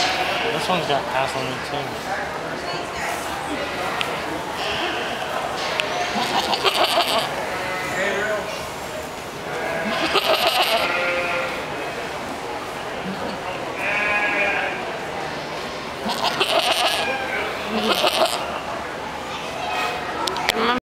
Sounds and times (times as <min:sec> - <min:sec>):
Bleat: 0:06.1 - 0:08.0, 0:09.5 - 0:11.6, 0:13.8 - 0:14.8, 0:16.0 - 0:18.4.